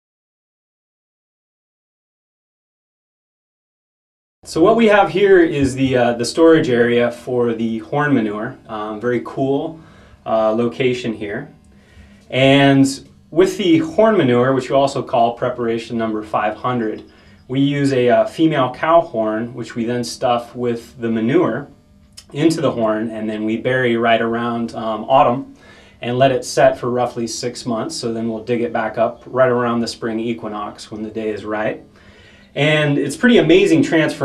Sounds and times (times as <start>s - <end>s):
Speech: 4.5s - 11.5s, 12.3s - 31.8s, 32.6s - 34.2s.